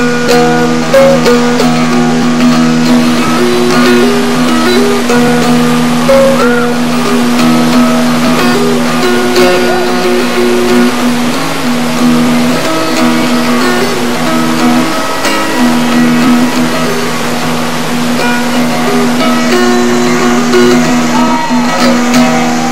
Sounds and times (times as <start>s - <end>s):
Music: 0.0s - 22.7s.